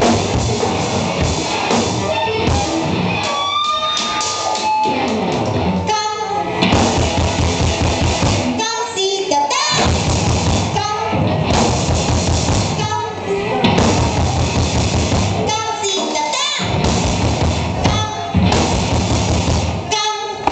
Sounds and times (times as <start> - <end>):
Music: 0.0 - 20.5
Speech: 15.4 - 16.7.